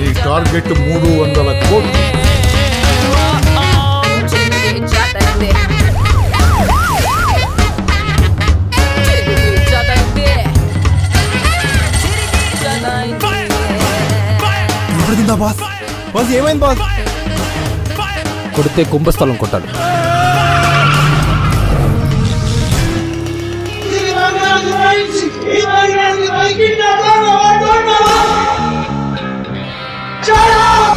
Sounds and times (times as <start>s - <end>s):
Music: 0.0s - 30.9s.